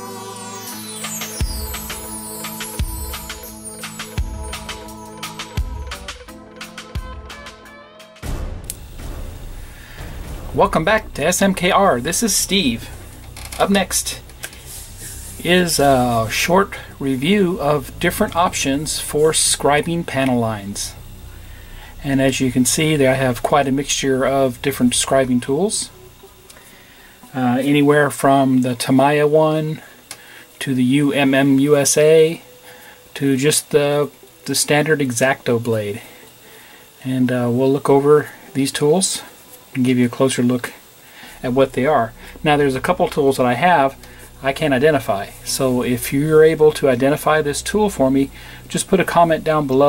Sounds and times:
Music: 0:00.0 - 0:49.8
Speech: 0:10.5 - 0:13.0, 0:13.6 - 0:14.3, 0:15.4 - 0:21.0, 0:22.0 - 0:25.9, 0:27.3 - 0:29.9, 0:30.6 - 0:32.4, 0:33.2 - 0:36.1, 0:37.0 - 0:40.8, 0:41.4 - 0:49.8.

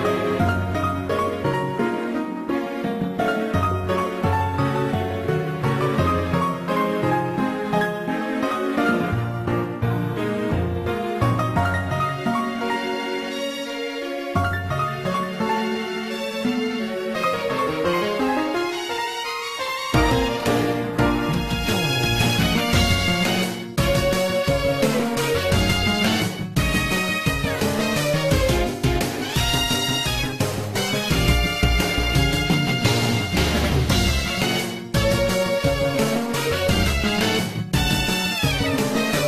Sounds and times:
Soundtrack music: 0:00.0 - 0:39.2
Video game music: 0:00.0 - 0:39.2.

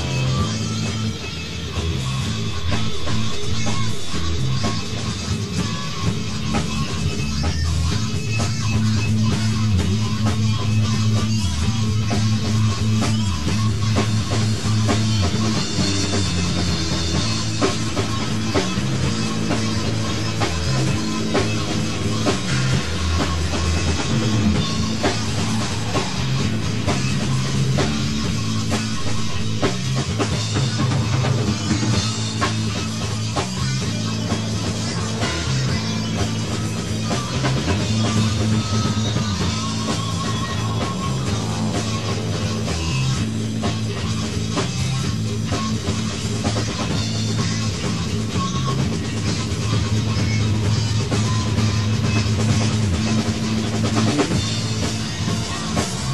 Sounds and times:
Rock music: 0:00.0 - 0:56.1.

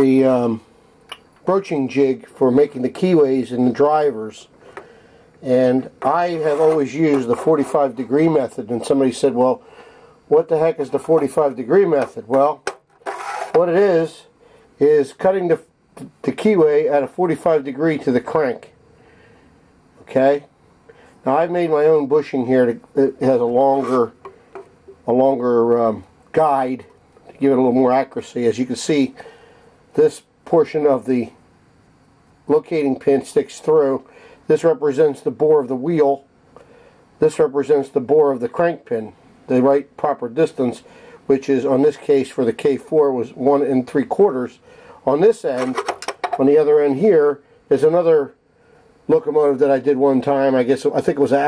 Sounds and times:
Speech: 0:00.0 - 0:00.6, 0:01.4 - 0:04.5, 0:05.4 - 0:09.6, 0:10.3 - 0:12.6, 0:13.5 - 0:18.8, 0:20.0 - 0:20.5, 0:21.2 - 0:24.2, 0:25.0 - 0:29.2, 0:29.9 - 0:31.4, 0:32.5 - 0:36.3, 0:37.2 - 0:45.8, 0:46.4 - 0:48.4, 0:49.1 - 0:51.4.

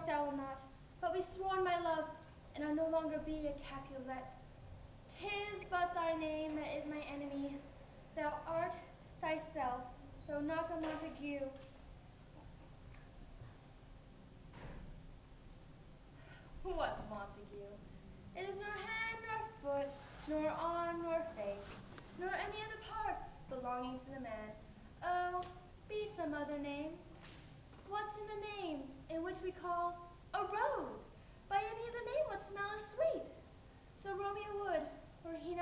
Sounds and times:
Speech: 0:00.0 - 0:04.4, 0:05.1 - 0:11.6, 0:16.6 - 0:17.8, 0:18.4 - 0:27.1, 0:27.8 - 0:33.4, 0:34.0 - 0:35.6.

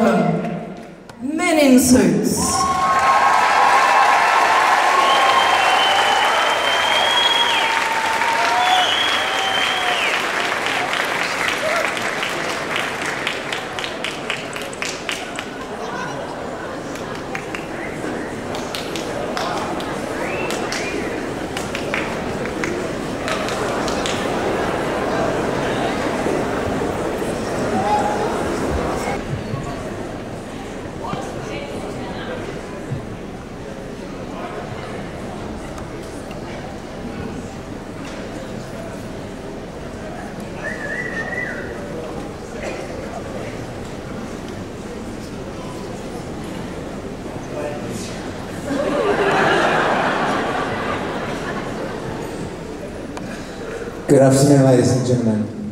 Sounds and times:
Applause: 0:02.6 - 0:15.8, 0:16.9 - 0:24.7.

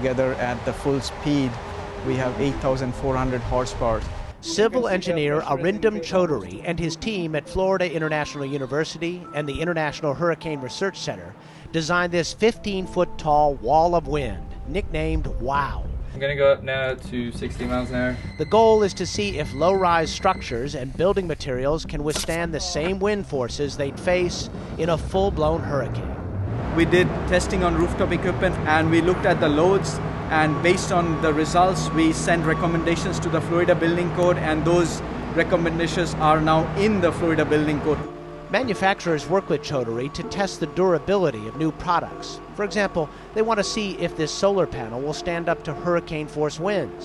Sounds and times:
Speech: 0:00.0 - 0:26.0, 0:26.8 - 0:38.0, 0:38.6 - 0:47.0
Music: 0:04.4 - 0:47.0.

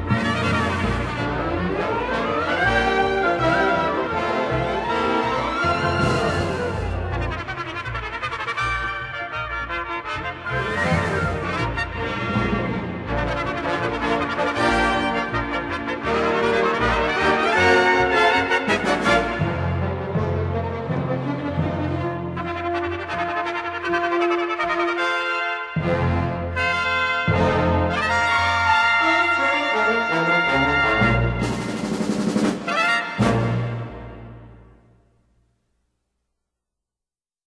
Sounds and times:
Trumpet: 0:00.0 - 0:35.0.

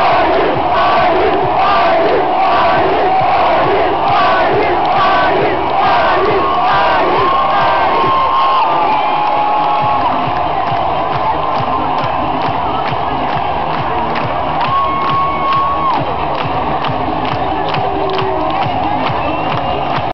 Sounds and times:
Music: 0:00.0 - 0:20.1.

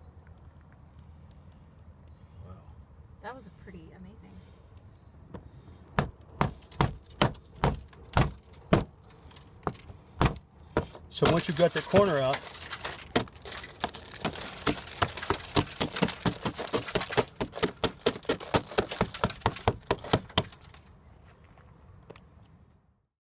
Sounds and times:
Breaking: 0:06.0 - 0:20.9.

